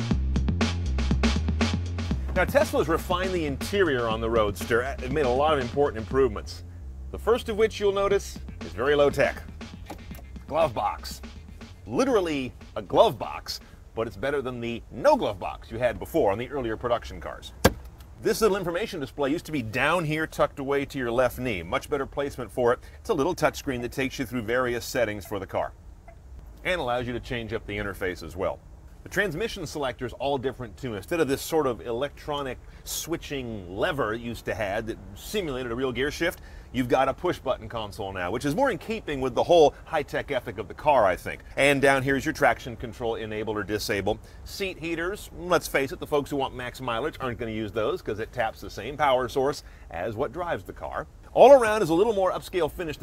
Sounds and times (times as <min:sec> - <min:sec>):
Music: 0:00.0 - 0:13.8
Speech: 0:02.3 - 0:09.5, 0:10.5 - 0:11.2, 0:11.9 - 0:17.6, 0:18.2 - 0:25.8, 0:26.6 - 0:53.0.